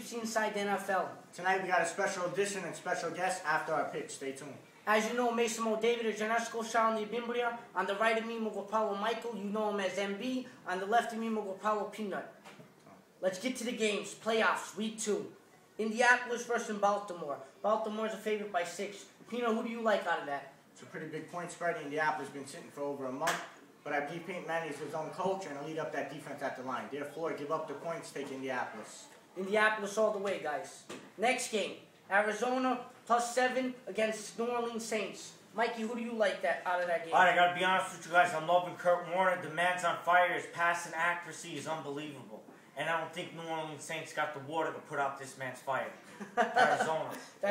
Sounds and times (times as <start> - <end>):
Speech: 0.0 - 12.4, 13.2 - 46.0, 46.6 - 47.5.